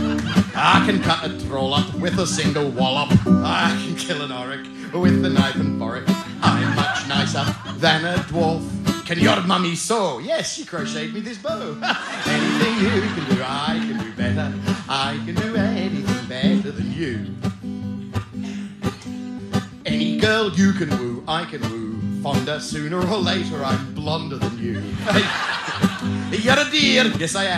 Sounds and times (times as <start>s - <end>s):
Country: 0.0s - 27.5s
Guitar: 0.0s - 27.5s.